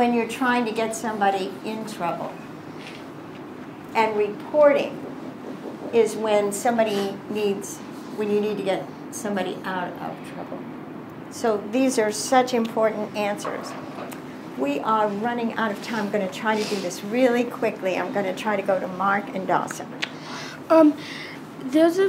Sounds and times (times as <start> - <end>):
Female speech, woman speaking: 0.0 - 2.4, 4.0 - 5.0, 5.9 - 10.7, 11.3 - 13.9, 14.6 - 20.0, 20.7 - 21.0, 21.6 - 22.0.